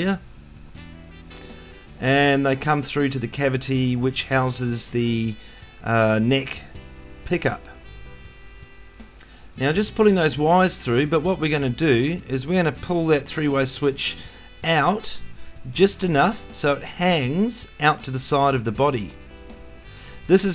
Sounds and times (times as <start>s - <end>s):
Speech: 0.0s - 0.2s, 2.0s - 6.7s, 7.3s - 7.8s, 9.6s - 19.2s, 20.3s - 20.5s.